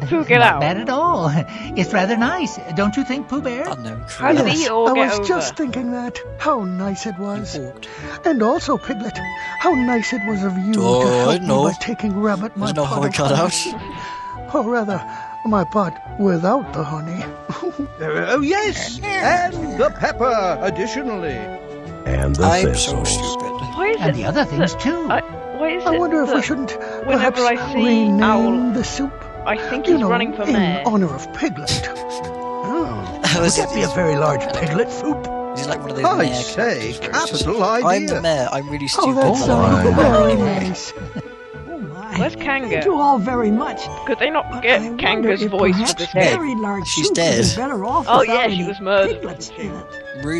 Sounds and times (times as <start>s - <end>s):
Speech: 0.0s - 21.5s, 22.1s - 50.3s
Music: 0.0s - 50.3s.